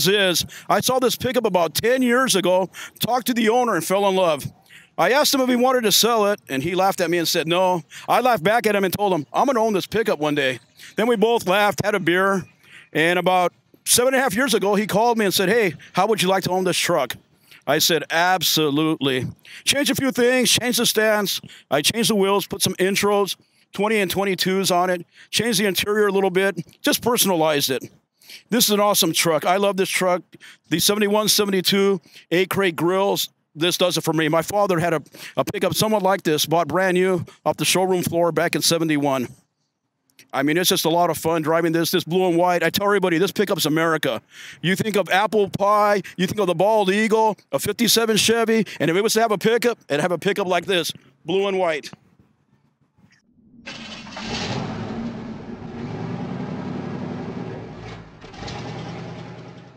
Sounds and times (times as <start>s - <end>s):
Speech: 0.0s - 39.4s, 40.2s - 52.0s.